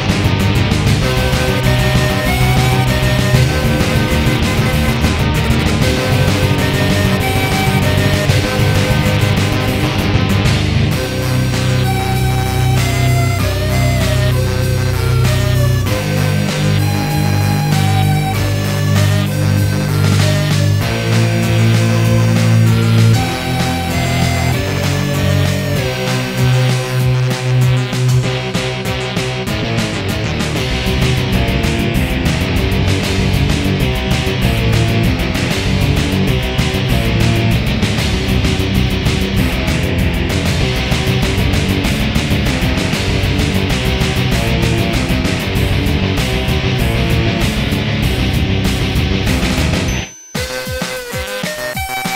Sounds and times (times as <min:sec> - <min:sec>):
Psychedelic rock: 0:00.0 - 0:52.1.